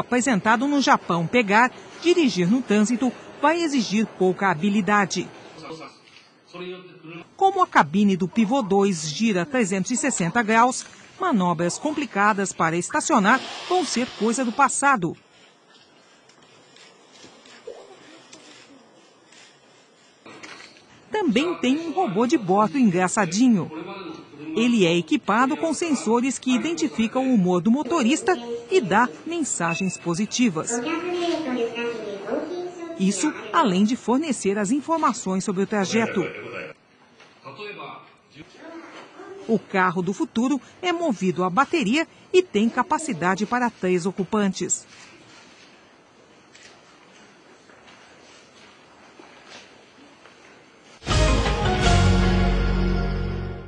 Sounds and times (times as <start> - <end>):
Speech: 6.6 - 15.2, 21.2 - 24.0, 24.6 - 36.6, 39.5 - 44.9.